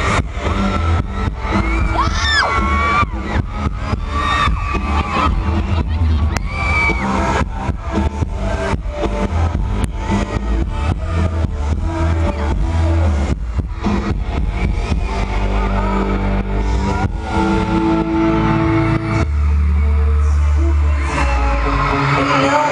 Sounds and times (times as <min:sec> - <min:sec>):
Music: 0:00.0 - 0:22.7
Male singing: 0:06.9 - 0:17.8, 0:19.2 - 0:22.7.